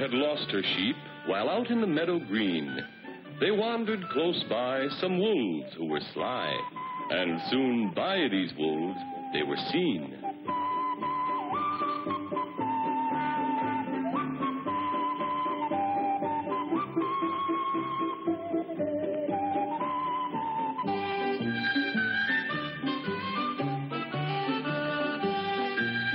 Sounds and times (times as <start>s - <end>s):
Music: 0.0s - 26.1s.